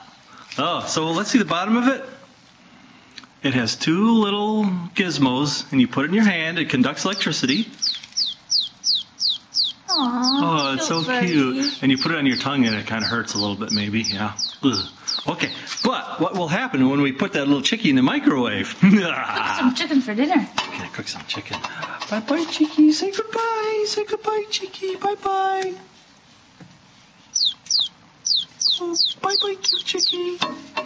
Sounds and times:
Speech: 9.9 - 19.6, 20.8 - 25.9, 28.8 - 30.5.

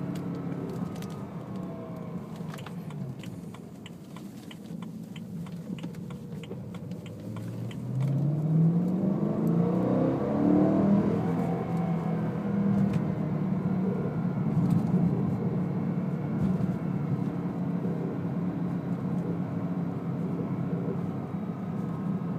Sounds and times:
Heavy engine (low frequency): 0.0 - 22.3
Vehicle: 0.0 - 22.3
Accelerating, revving, vroom: 7.2 - 15.4.

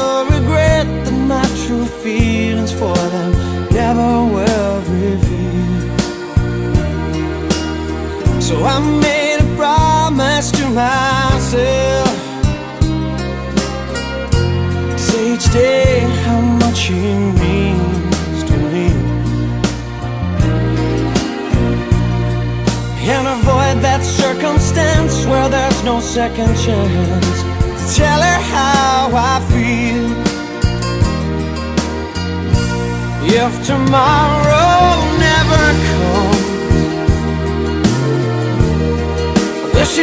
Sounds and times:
Soul music: 0.0 - 40.0.

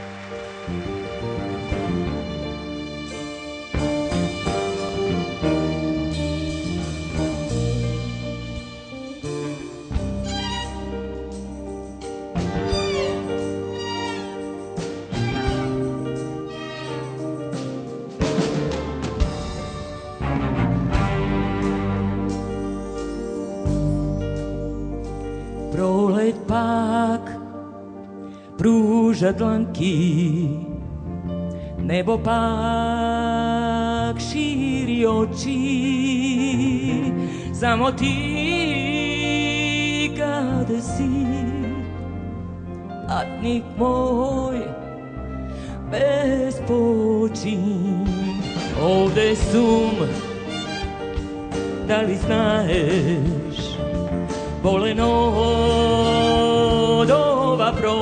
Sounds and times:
Music: 0.0 - 58.0.

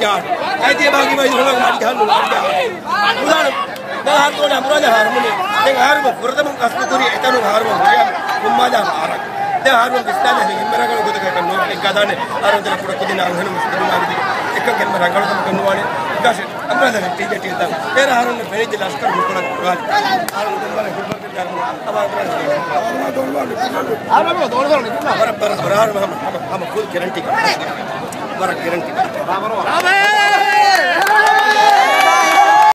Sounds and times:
Speech: 0.0 - 32.3.

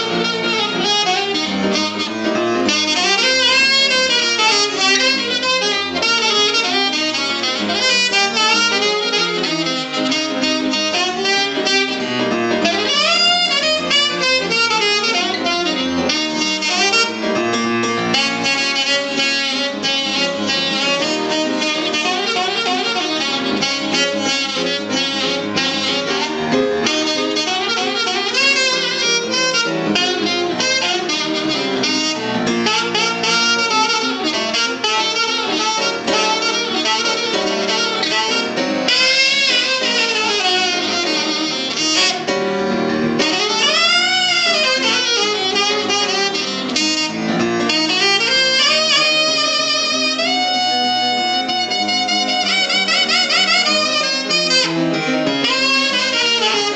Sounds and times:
Piano: 0.0 - 56.7
Saxophone: 0.0 - 56.7.

